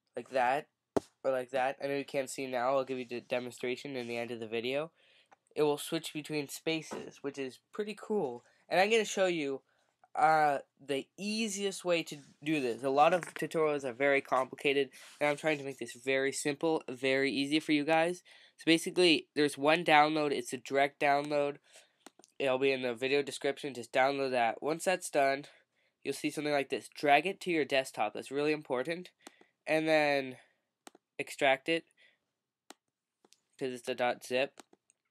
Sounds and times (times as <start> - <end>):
Speech: 0.2 - 0.6, 1.3 - 4.9, 5.6 - 9.6, 10.2 - 21.6, 22.4 - 25.5, 26.1 - 29.1, 29.7 - 30.4, 31.2 - 31.8, 33.6 - 34.5.